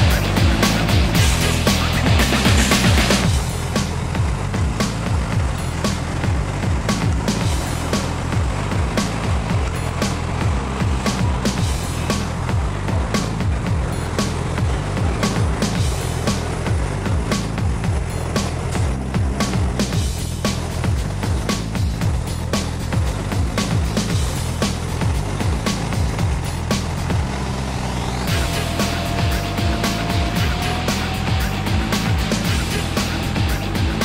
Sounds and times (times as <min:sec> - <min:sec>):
Music: 0:00.0 - 0:34.0
Truck: 0:00.0 - 0:34.0.